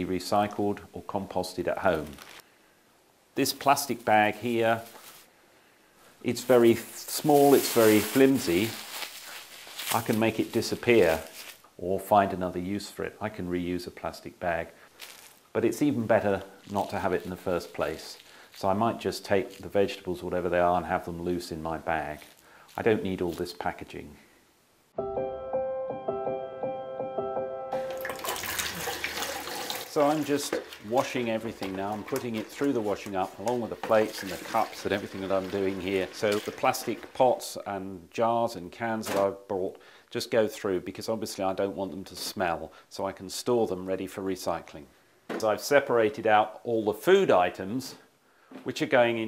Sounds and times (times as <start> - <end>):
Speech: 0.0 - 2.2, 3.4 - 4.9, 6.2 - 8.8, 9.9 - 14.8, 15.5 - 24.2, 29.9 - 49.2.